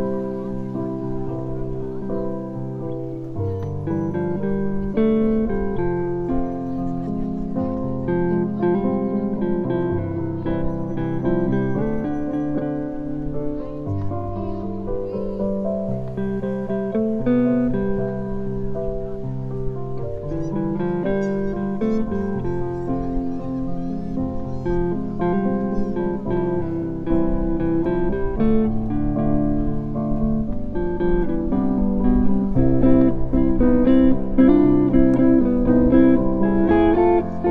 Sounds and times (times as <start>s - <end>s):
Music: 0.0s - 37.5s.